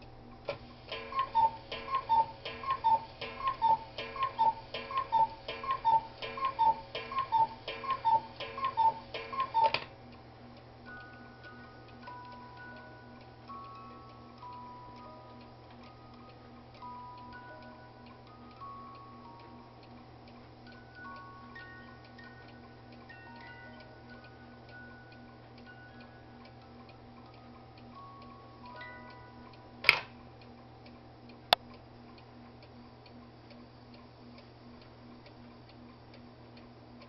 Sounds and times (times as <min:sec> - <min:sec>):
Tick-tock: 0:00.0 - 0:37.0.